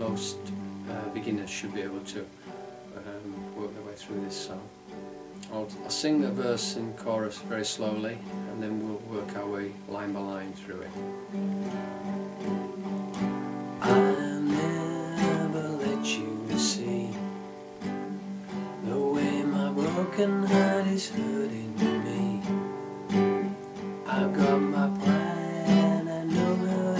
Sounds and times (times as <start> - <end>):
Speech: 0.0 - 2.3, 2.9 - 4.7, 5.4 - 11.0
Guitar: 0.0 - 26.9.